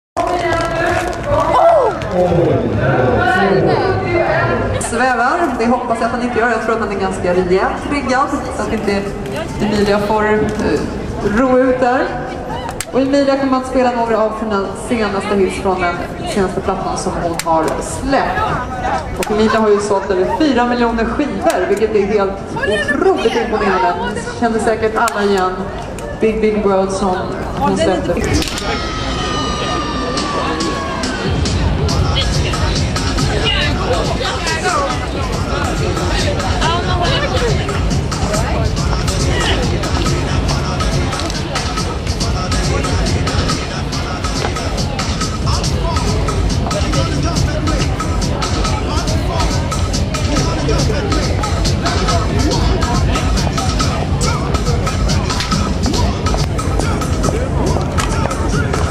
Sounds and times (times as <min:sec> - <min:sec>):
Run: 0:00.2 - 0:02.6.